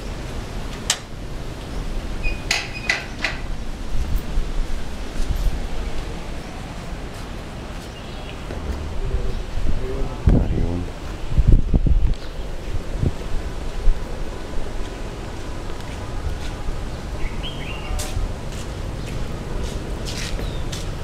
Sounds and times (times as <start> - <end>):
Speech: 8.5 - 11.0.